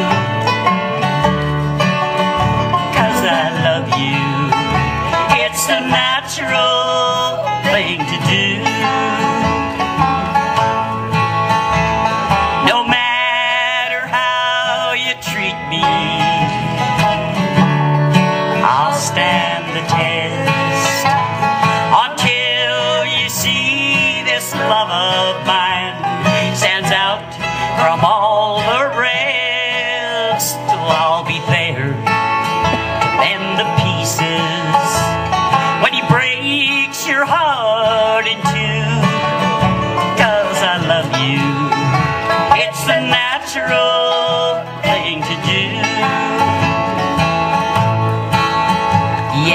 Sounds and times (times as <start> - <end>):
Country: 0.0 - 49.5.